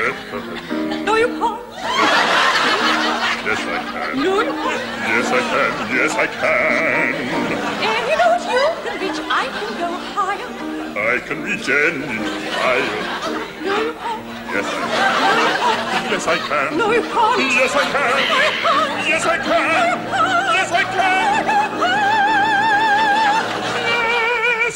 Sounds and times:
Music: 0.0 - 24.7
Male singing: 5.0 - 7.7, 11.0 - 13.0, 14.6 - 22.3, 23.8 - 24.7.

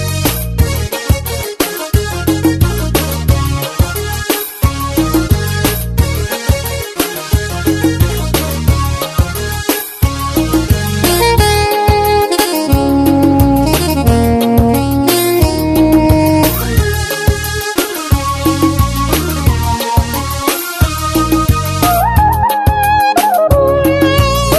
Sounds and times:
Music: 0.0 - 24.5.

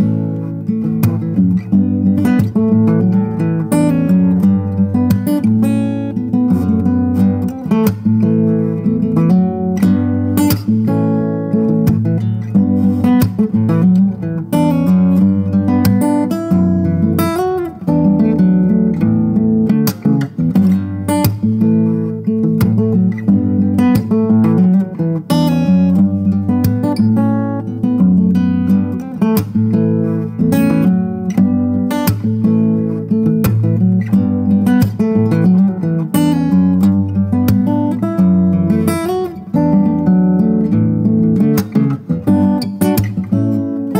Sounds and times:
Acoustic guitar: 0.0 - 43.9.

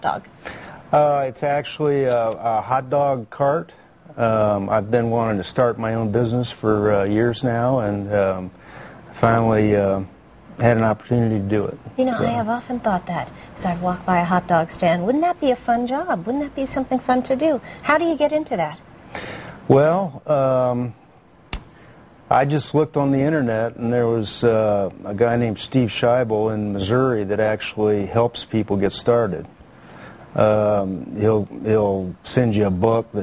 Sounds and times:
Speech: 9.2 - 13.1, 19.7 - 21.0, 22.3 - 29.5, 30.4 - 33.2.

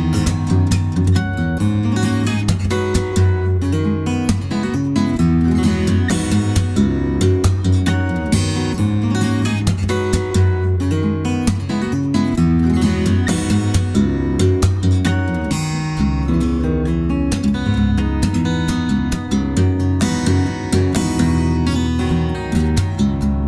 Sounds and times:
Music: 0.0 - 23.4.

